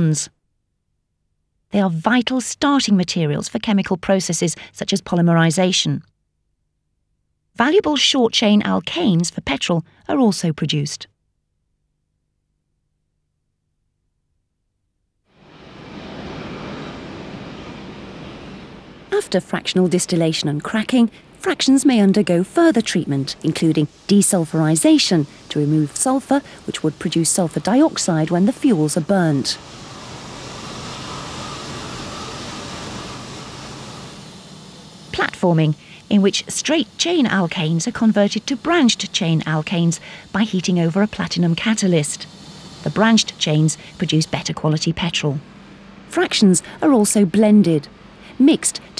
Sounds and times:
Speech: 0.0 - 0.4, 1.7 - 6.1, 7.6 - 11.1, 19.2 - 29.6, 35.1 - 42.3, 42.9 - 45.4, 46.1 - 48.9.

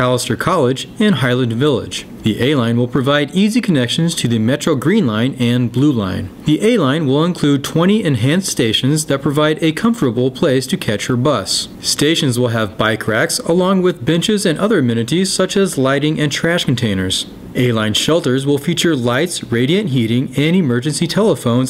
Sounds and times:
Speech: 0.0 - 21.6.

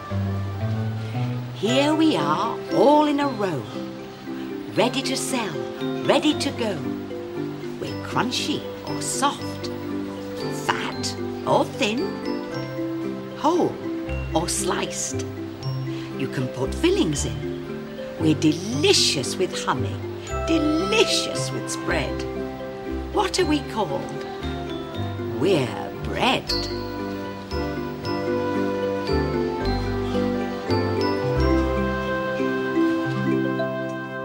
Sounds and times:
Music: 0.0 - 34.2
Speech: 1.6 - 3.7, 4.7 - 6.9, 7.8 - 9.7, 10.4 - 12.1, 13.4 - 15.2, 16.2 - 17.4, 18.2 - 22.2, 23.2 - 24.2, 25.3 - 26.7.

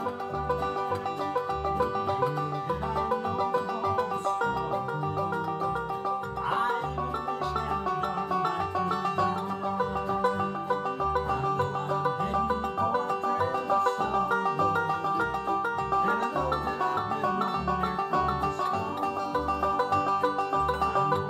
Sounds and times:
Banjo: 0.0 - 21.3
Bluegrass: 0.0 - 21.3
Guitar: 0.0 - 21.3.

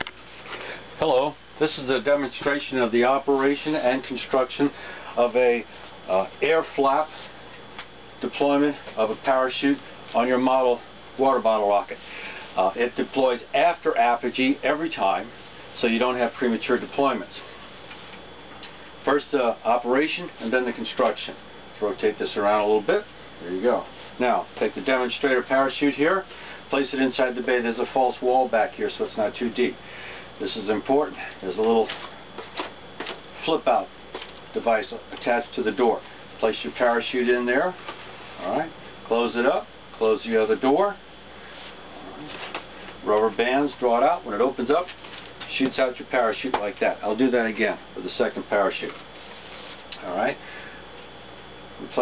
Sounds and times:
Speech: 1.0 - 7.3, 8.2 - 12.0, 12.6 - 17.5, 19.0 - 29.8, 30.4 - 32.1, 33.4 - 33.9, 34.6 - 37.8, 38.4 - 41.0, 42.0 - 49.0, 50.0 - 50.4, 51.8 - 52.0.

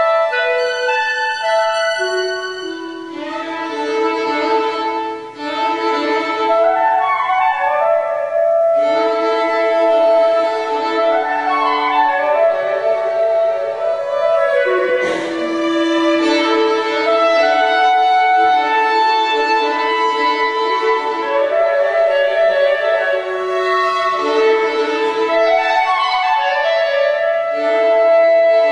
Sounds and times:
Violin, fiddle: 0.0 - 28.7.

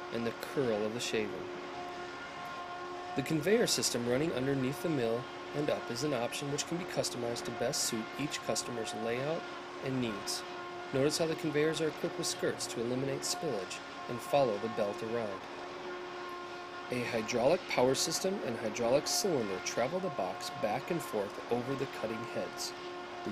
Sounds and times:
Speech: 0.1 - 1.5, 3.2 - 10.4, 11.0 - 15.4, 16.9 - 22.7.

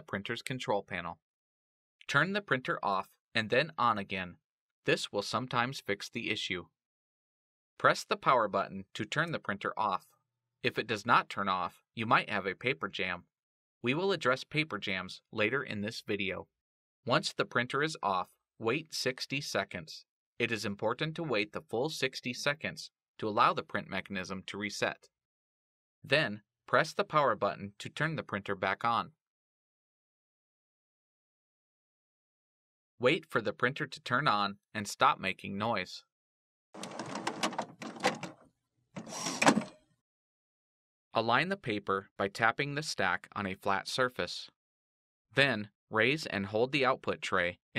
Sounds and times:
Speech: 0.0 - 1.2, 2.0 - 6.7, 7.8 - 13.3, 13.9 - 16.5, 17.1 - 25.1, 26.1 - 29.2, 33.0 - 36.1, 41.2 - 44.6, 45.4 - 47.7.

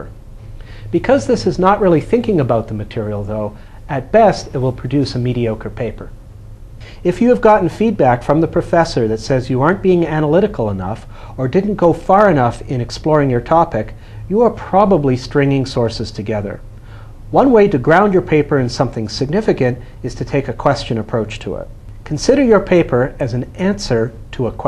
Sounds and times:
Speech: 0.9 - 6.2, 7.0 - 16.6, 17.3 - 24.6.

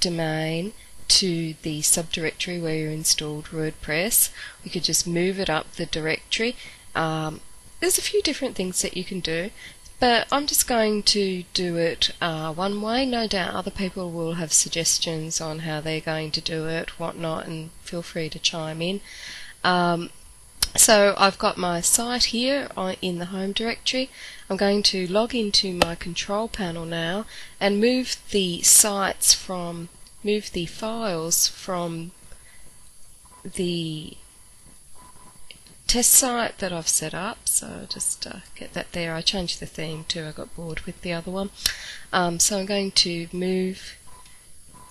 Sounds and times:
Speech: 0.0 - 32.1, 33.5 - 34.2, 35.9 - 44.0.

